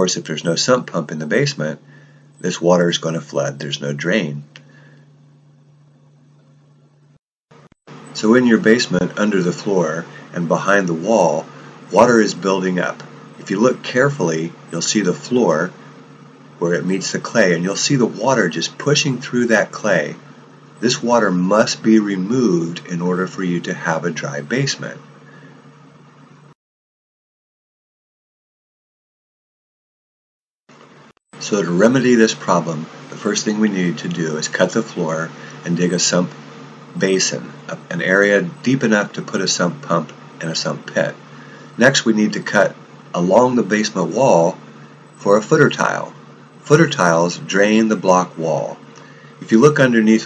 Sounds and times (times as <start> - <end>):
Narration, monologue: 0.0 - 26.6, 30.7 - 50.2.